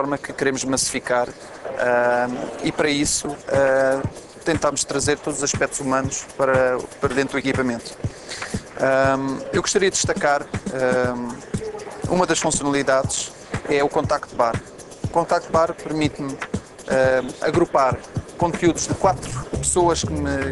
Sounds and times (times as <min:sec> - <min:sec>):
Speech: 0:00.0 - 0:08.0, 0:08.8 - 0:20.5
Music: 0:00.0 - 0:20.5.